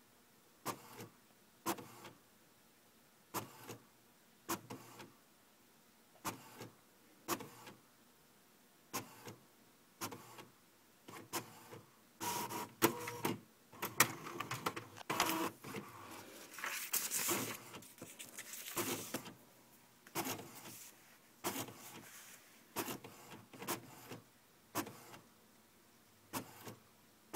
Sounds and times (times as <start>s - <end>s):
Printer: 0.7s - 1.1s, 1.7s - 2.2s, 3.4s - 3.8s, 4.5s - 5.1s, 6.2s - 6.7s, 7.3s - 7.8s, 9.0s - 9.4s, 10.0s - 10.5s, 11.1s - 16.3s, 17.2s - 17.9s, 18.8s - 19.4s, 20.2s - 22.2s, 22.8s - 24.2s, 24.8s - 25.2s, 26.3s - 26.8s.